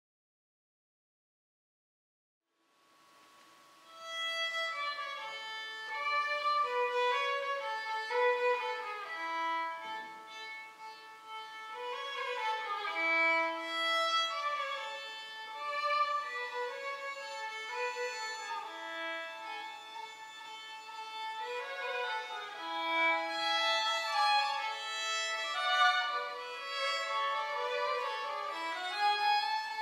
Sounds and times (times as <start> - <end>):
Violin, fiddle: 3.8 - 29.8.